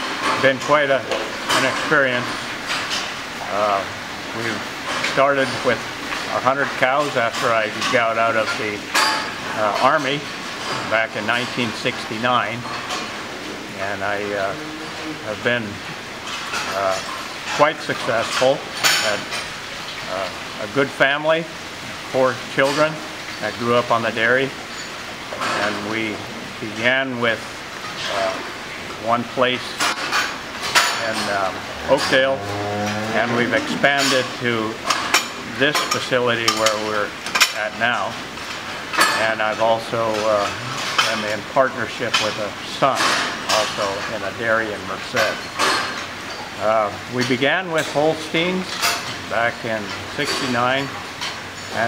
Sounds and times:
Speech: 0.4 - 2.4, 3.4 - 8.9, 9.5 - 12.7, 13.8 - 15.8, 16.7 - 19.3, 20.1 - 24.6, 25.4 - 29.8, 31.0 - 34.8, 35.5 - 38.2, 39.0 - 45.4, 46.6 - 51.0.

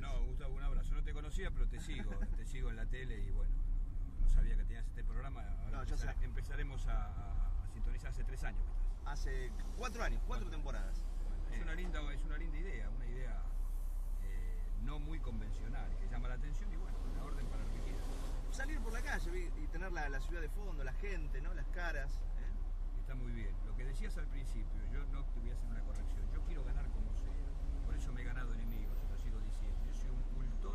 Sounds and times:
Speech: 0.0 - 13.6, 14.2 - 30.7.

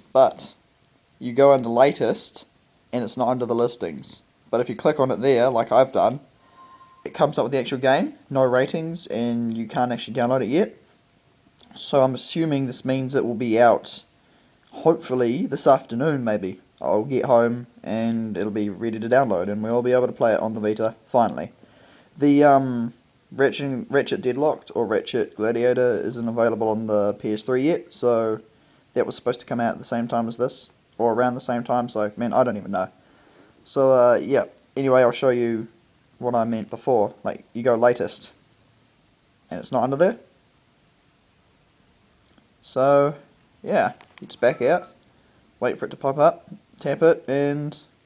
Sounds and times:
Speech: 0.0 - 0.6, 1.2 - 6.3, 7.0 - 10.8, 11.6 - 14.1, 14.7 - 21.6, 22.2 - 33.0, 33.6 - 38.4, 39.5 - 40.3, 42.6 - 45.0, 45.6 - 48.0.

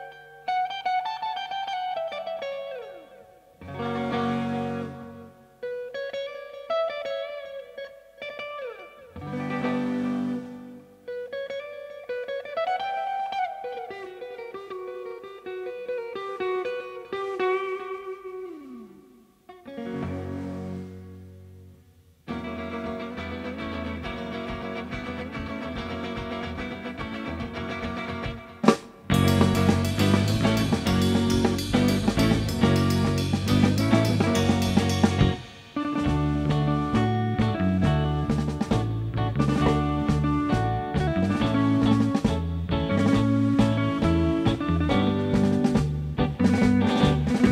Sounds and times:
Strum: 3.6 - 5.5, 19.6 - 47.5.

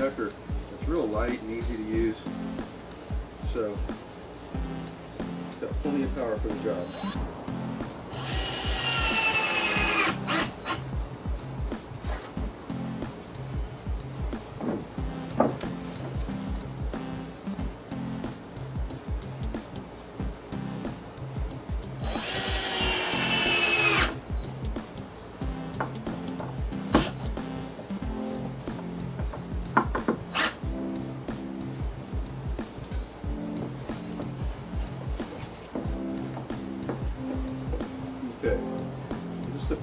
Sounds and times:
Speech: 0.0 - 2.2, 3.5 - 3.9, 5.6 - 6.9, 38.2 - 38.6, 39.5 - 39.8
Music: 0.0 - 39.8.

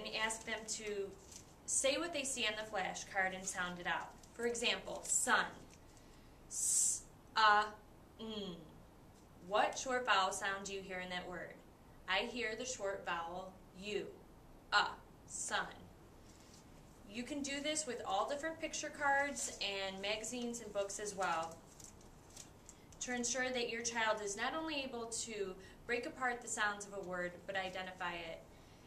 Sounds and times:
Speech: 0.0 - 5.7, 6.6 - 8.7, 9.5 - 14.2, 14.8 - 15.9, 17.1 - 21.6, 23.0 - 28.4.

